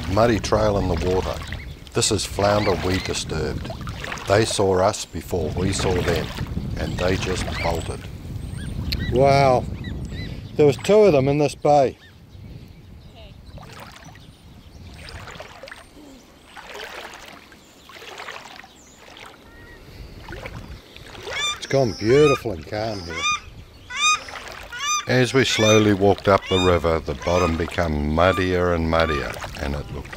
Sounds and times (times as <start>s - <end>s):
Outside, rural or natural: 0.0s - 30.1s.